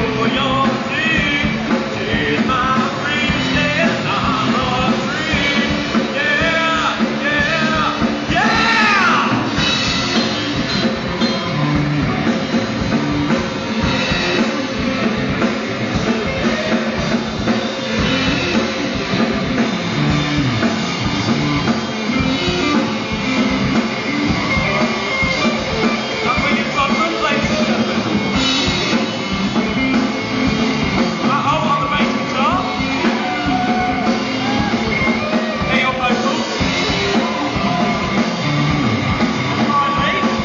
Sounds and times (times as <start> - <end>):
Rock music: 0.0 - 40.4
Yell: 8.3 - 9.5, 33.0 - 35.0
Speech: 26.2 - 28.1, 31.2 - 32.8, 35.6 - 36.6, 39.6 - 40.4.